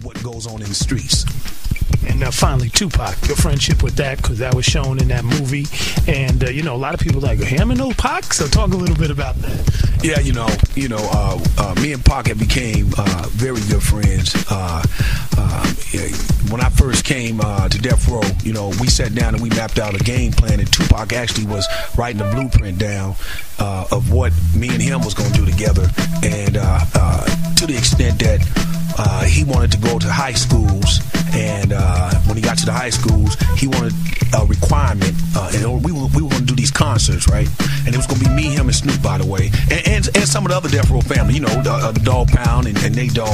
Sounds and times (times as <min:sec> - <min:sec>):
Music: 0:00.0 - 0:43.3.